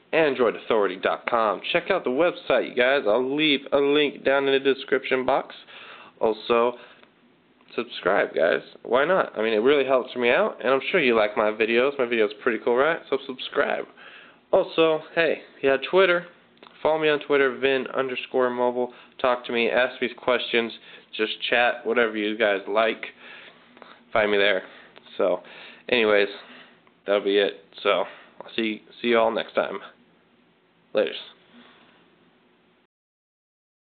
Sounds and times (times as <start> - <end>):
Speech: 0.1 - 6.8, 7.7 - 23.2, 24.1 - 26.5, 27.1 - 30.0, 30.9 - 31.4.